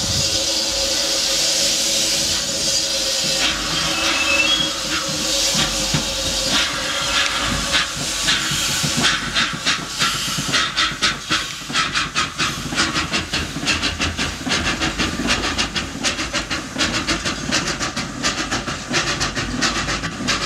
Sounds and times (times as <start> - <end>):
Hiss: 0.0 - 20.4.